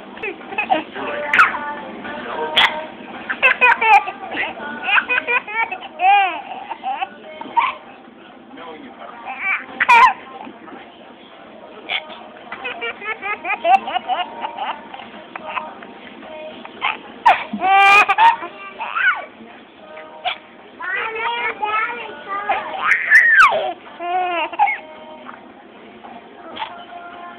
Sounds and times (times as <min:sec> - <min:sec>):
Music: 0:00.0 - 0:27.3.